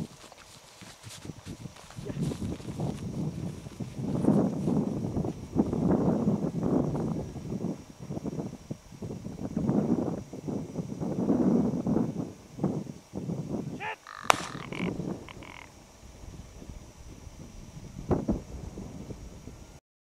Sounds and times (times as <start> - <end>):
Speech: 13.8 - 14.0.